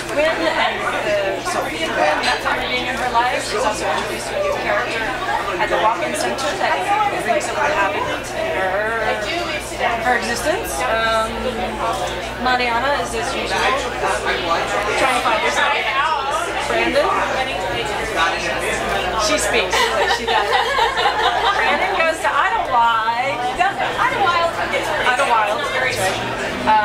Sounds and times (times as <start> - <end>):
Speech: 0.0 - 26.8.